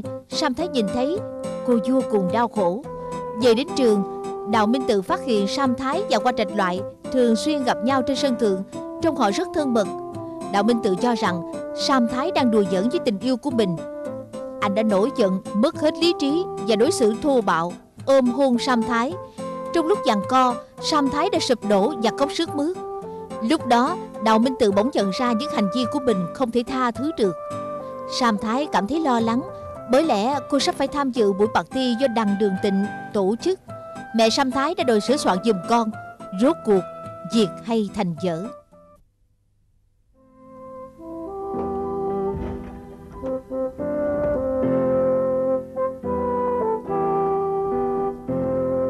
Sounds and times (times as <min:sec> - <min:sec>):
Speech: 0:00.0 - 0:13.8, 0:14.6 - 0:22.8, 0:23.4 - 0:27.4, 0:28.1 - 0:33.6, 0:34.2 - 0:38.6
Music: 0:00.0 - 0:39.1, 0:40.2 - 0:48.9.